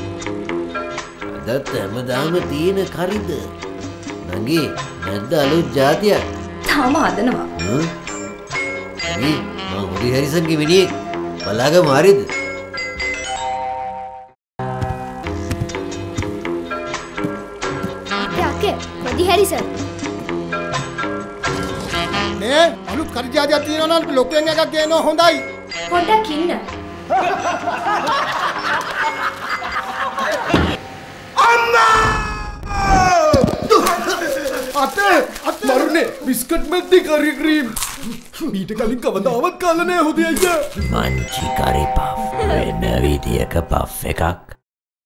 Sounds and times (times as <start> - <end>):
Speech: 38.5 - 44.6.